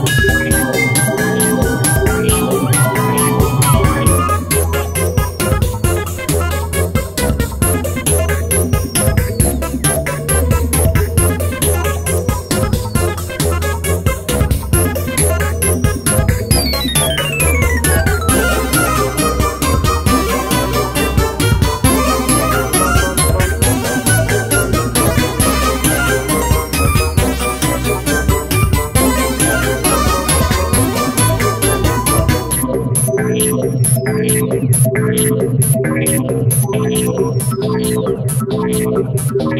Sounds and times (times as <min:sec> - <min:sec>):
Music: 0:00.0 - 0:39.6.